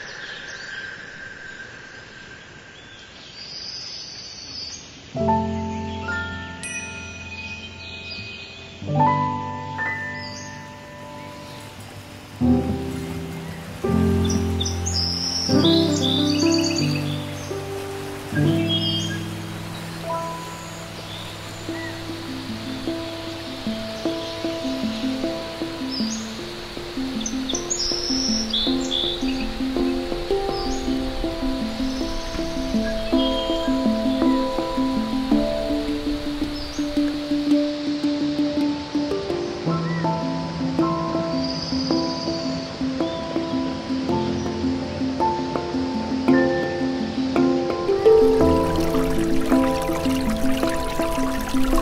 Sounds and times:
Stream: 0:00.0 - 0:51.8.

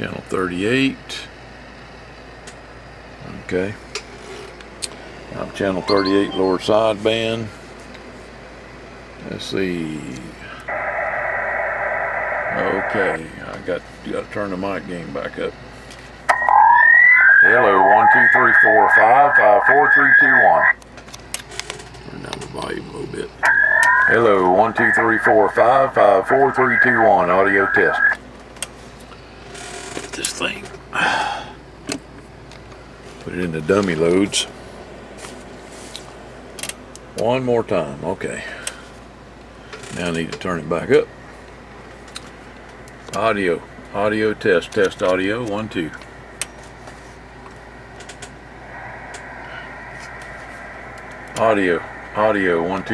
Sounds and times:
Speech: 0:00.0 - 0:01.4, 0:03.2 - 0:03.8, 0:05.3 - 0:07.6, 0:09.2 - 0:10.6, 0:12.5 - 0:15.6, 0:17.4 - 0:20.8, 0:22.0 - 0:23.4, 0:24.0 - 0:28.2, 0:30.1 - 0:30.8, 0:33.2 - 0:34.5, 0:37.2 - 0:38.6, 0:39.9 - 0:41.1, 0:43.1 - 0:46.0, 0:51.3 - 0:52.9
Radio: 0:05.4 - 0:06.9, 0:10.5 - 0:13.7, 0:16.3 - 0:20.8, 0:22.2 - 0:28.2, 0:48.7 - 0:52.9.

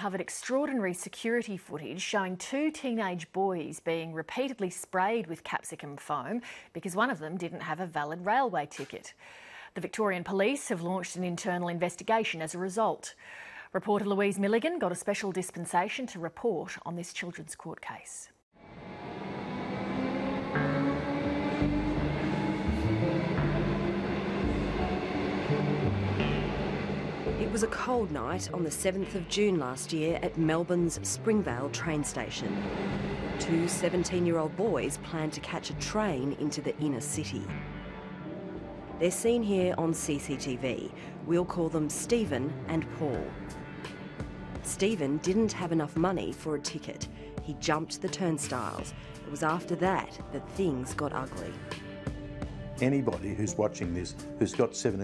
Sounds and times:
Speech: 0:00.0 - 0:09.2, 0:09.8 - 0:18.4, 0:27.4 - 0:32.5, 0:33.4 - 0:37.5, 0:39.0 - 0:43.4, 0:44.7 - 0:51.6, 0:52.8 - 0:55.0
Music: 0:18.6 - 0:55.0.

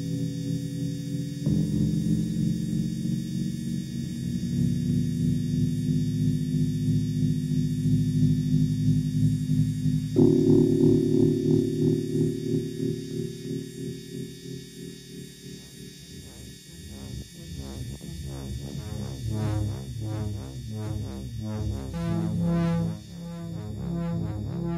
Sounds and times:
Music: 0:00.0 - 0:24.7.

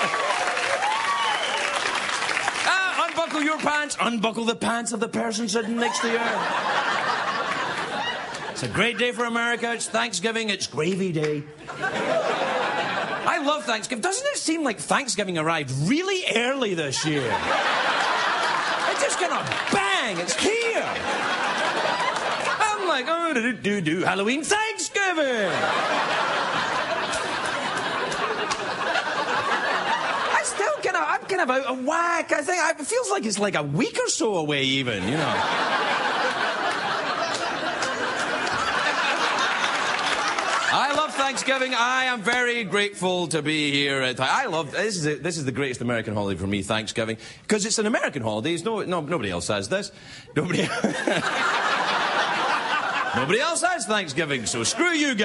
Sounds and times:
Narration, monologue: 0:02.2 - 0:55.2.

